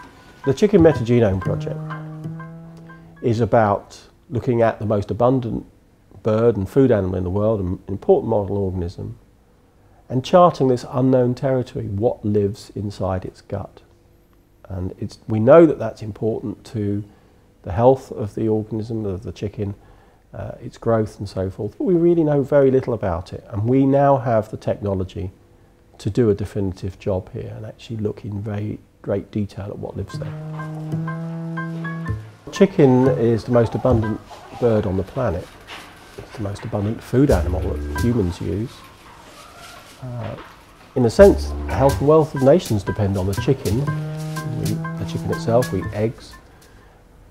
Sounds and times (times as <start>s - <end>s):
Music: 0.0s - 3.5s, 30.1s - 34.2s, 37.3s - 38.5s, 41.2s - 46.5s
Speech: 0.4s - 1.8s, 3.2s - 9.2s, 10.1s - 13.9s, 14.6s - 25.4s, 26.0s - 30.3s, 32.5s - 35.5s, 36.3s - 38.9s, 40.0s - 43.9s, 44.6s - 46.4s.